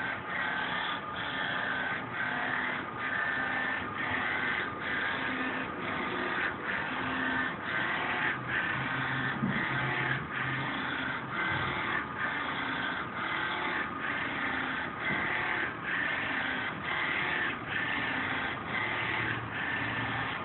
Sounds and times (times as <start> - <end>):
Printer: 0.0 - 20.4.